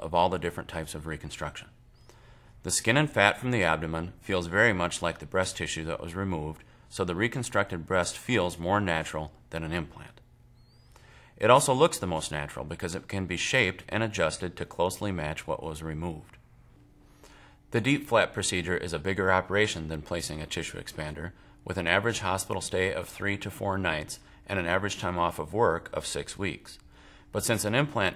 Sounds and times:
Speech: 0.0s - 1.8s, 2.6s - 10.3s, 11.4s - 16.4s, 17.7s - 28.1s.

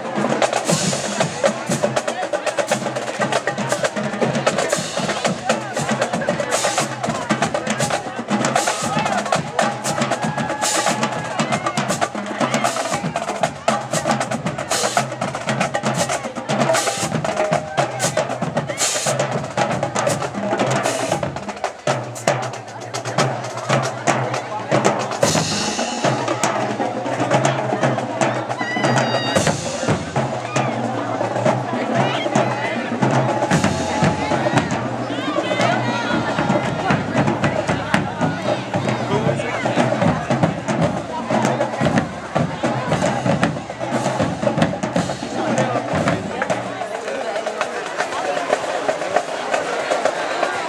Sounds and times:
Speech: 0.0s - 50.6s.

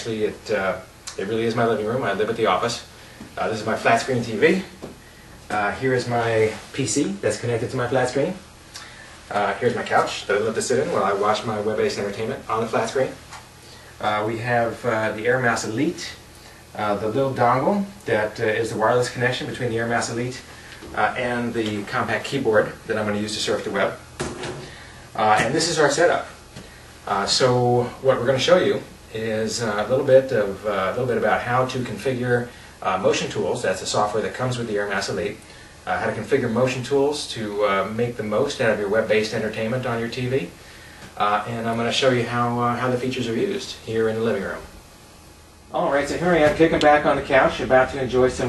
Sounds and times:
Speech: 0.0s - 4.8s, 5.5s - 8.5s, 9.3s - 13.2s, 14.0s - 24.0s, 25.2s - 26.4s, 27.1s - 40.6s, 41.2s - 44.8s, 45.7s - 48.4s.

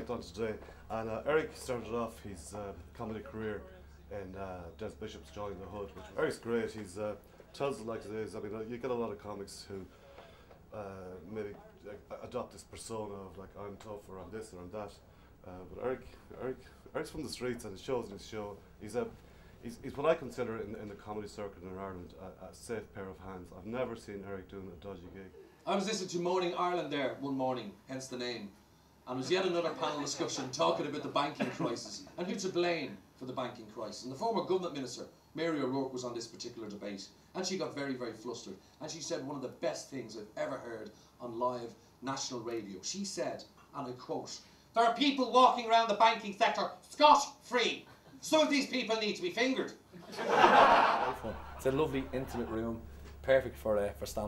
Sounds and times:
Speech: 0.0s - 9.9s, 10.7s - 49.8s, 51.0s - 54.2s.

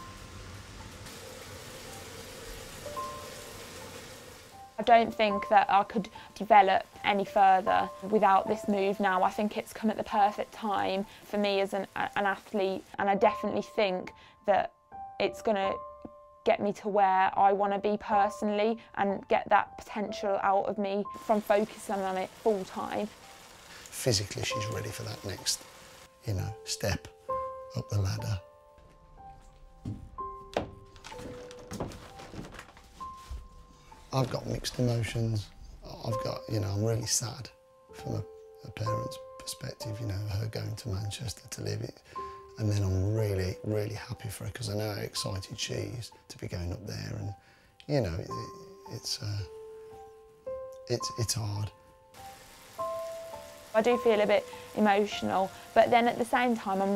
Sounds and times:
Music: 0.0s - 56.9s.

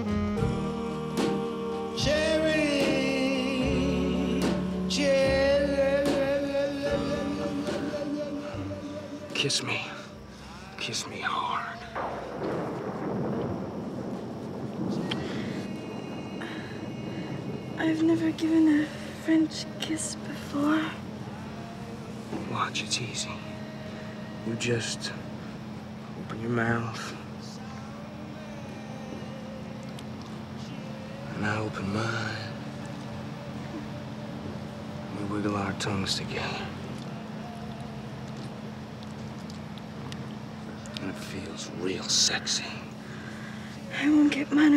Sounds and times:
Music: 0.0s - 13.1s, 15.1s - 44.7s.

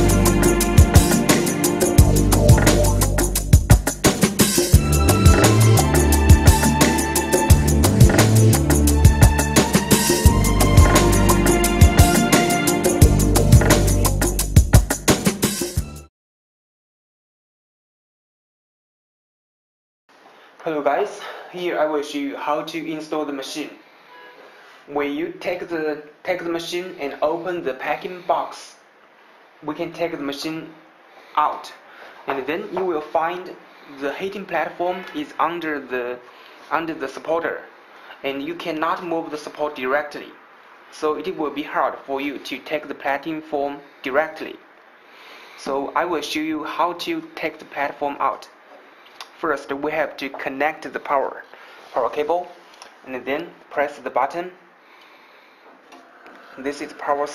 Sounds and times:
Speech: 20.6s - 23.8s, 24.9s - 28.8s, 29.6s - 30.8s, 31.4s - 44.6s, 45.6s - 48.6s, 49.3s - 54.6s, 56.6s - 57.3s.

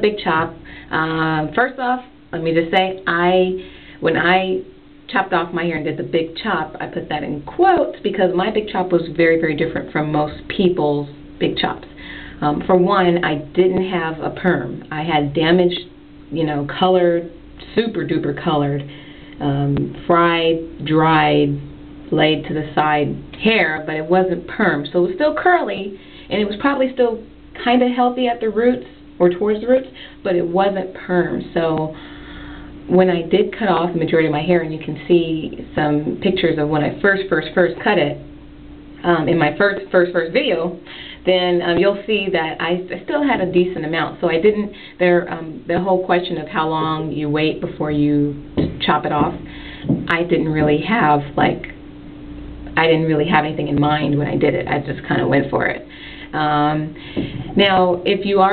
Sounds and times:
Speech: 0.0s - 32.0s, 32.9s - 38.3s, 39.0s - 51.8s, 52.7s - 58.5s.

